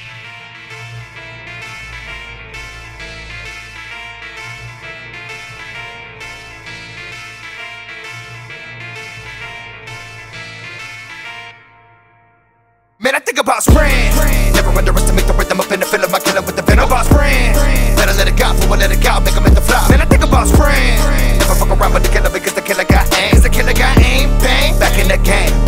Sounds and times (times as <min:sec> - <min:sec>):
Music: 0:00.0 - 0:25.6.